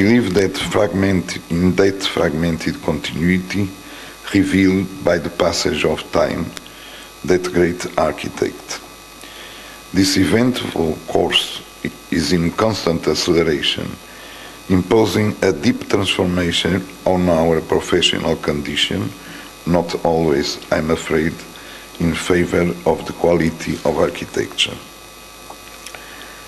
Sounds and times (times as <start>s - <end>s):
Male speech, man speaking: 0.0s - 6.6s, 7.2s - 8.8s, 9.9s - 14.0s, 14.7s - 24.9s
Narration, monologue: 0.0s - 26.4s.